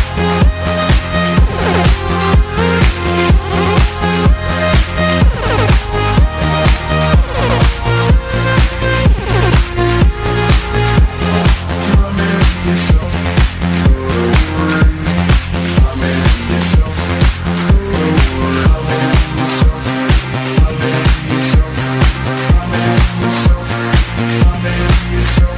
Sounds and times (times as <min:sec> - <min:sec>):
Music: 0:00.0 - 0:25.5.